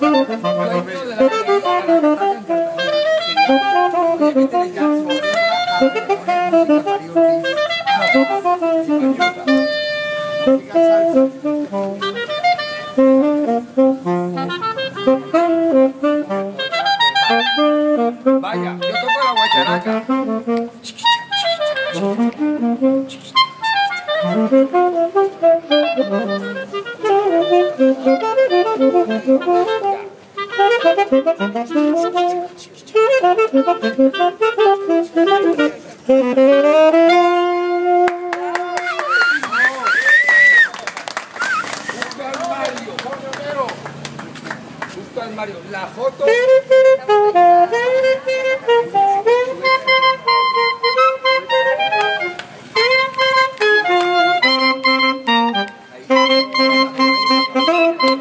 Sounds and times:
Brass instrument: 0:00.0 - 0:44.0, 0:46.2 - 0:58.2
Saxophone: 0:00.0 - 0:44.8, 0:45.7 - 0:58.2.

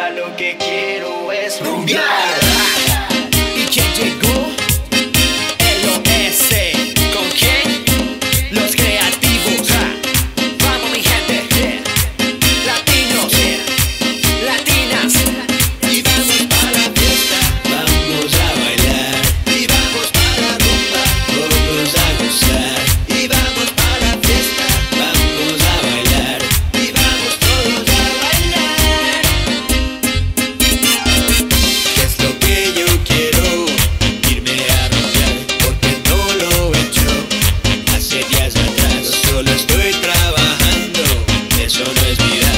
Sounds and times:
Dance music: 0:00.0 - 0:42.5.

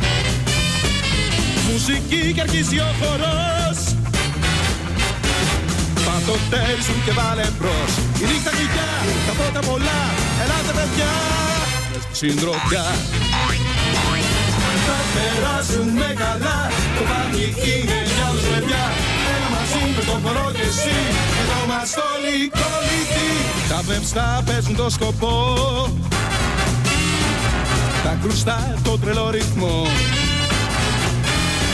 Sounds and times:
Music: 0:00.0 - 0:31.7.

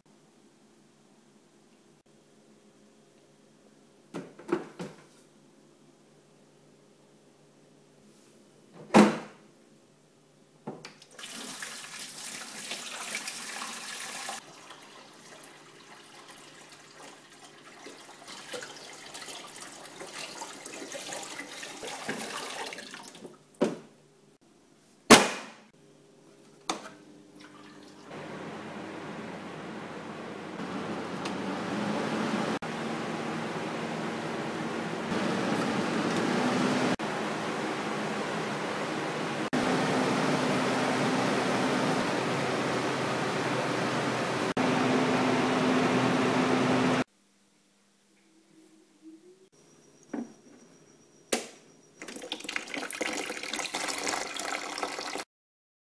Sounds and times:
Air conditioning: 0:27.1 - 0:47.1.

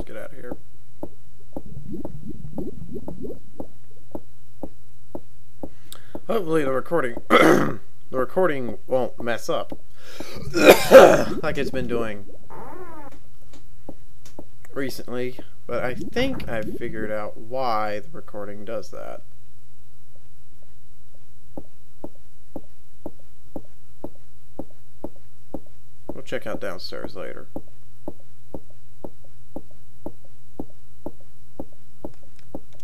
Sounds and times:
Speech: 0:00.0 - 0:00.6, 0:06.3 - 0:09.7, 0:11.2 - 0:12.3, 0:14.7 - 0:19.2, 0:26.2 - 0:27.5.

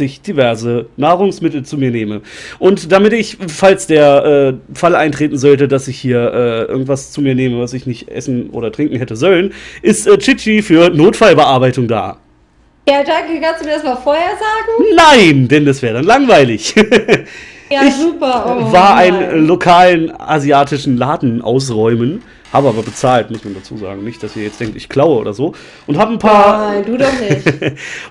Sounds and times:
Speech: 0:00.0 - 0:12.2, 0:12.9 - 0:28.1.

